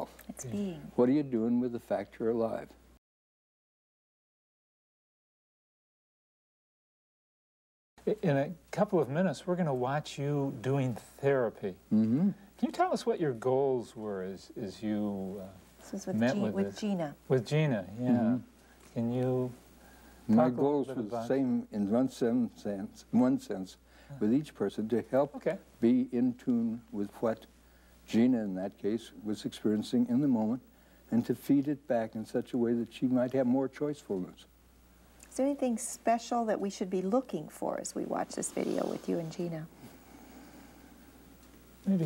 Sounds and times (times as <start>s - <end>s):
Conversation: 0.0s - 3.0s, 8.0s - 42.0s.